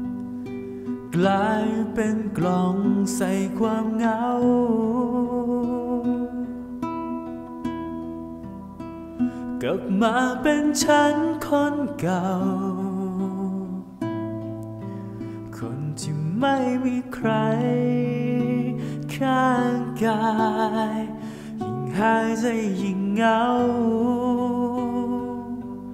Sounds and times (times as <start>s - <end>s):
Music: 0.0s - 25.9s.